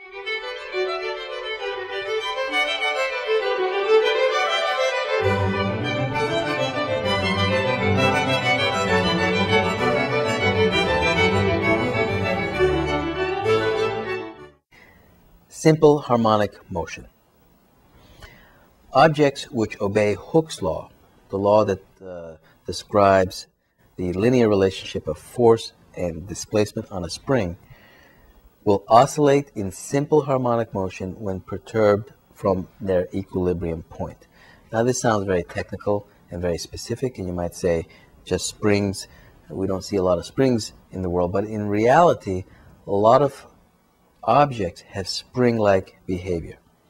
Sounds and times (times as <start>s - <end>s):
Music: 0.0s - 14.7s
Speech: 15.5s - 17.2s, 18.9s - 27.6s, 28.6s - 43.5s, 44.2s - 46.6s.